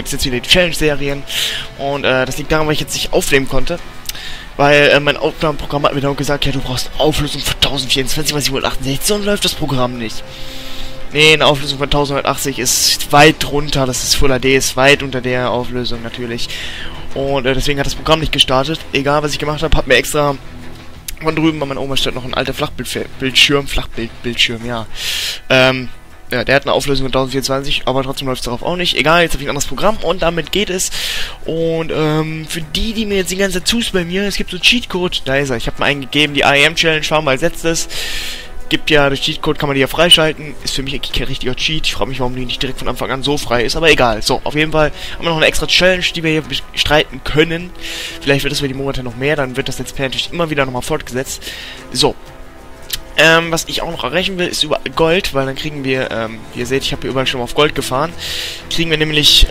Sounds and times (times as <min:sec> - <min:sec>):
Speech: 0:00.0 - 0:03.8, 0:04.6 - 0:10.2, 0:11.1 - 0:16.5, 0:17.1 - 0:20.4, 0:21.1 - 0:24.9, 0:25.5 - 0:37.9, 0:38.7 - 0:52.2, 0:52.9 - 0:59.5.